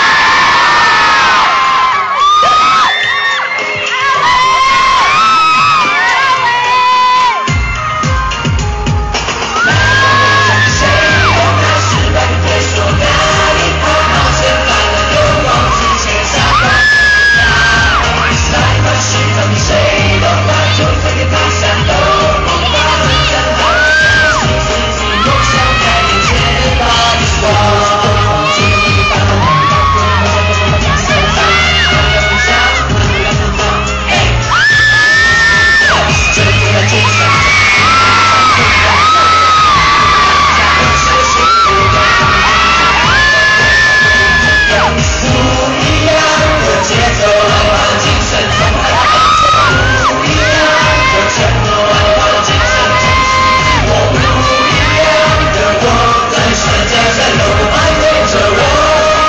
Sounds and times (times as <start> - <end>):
Music: 0.0 - 59.2.